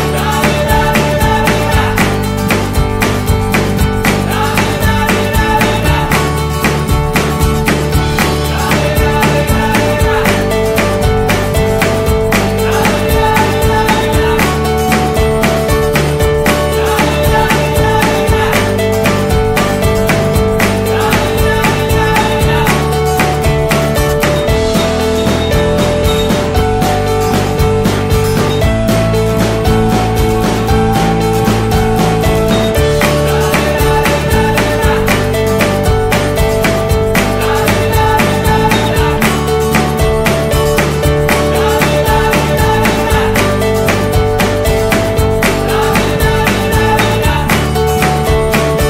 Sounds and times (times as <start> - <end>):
Music: 0.0 - 48.9.